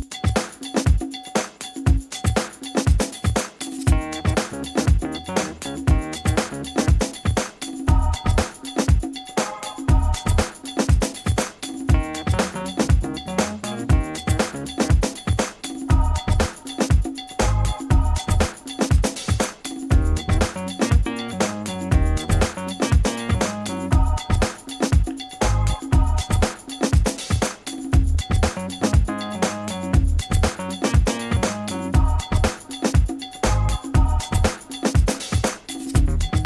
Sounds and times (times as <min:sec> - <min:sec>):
Music: 0:00.0 - 0:36.4.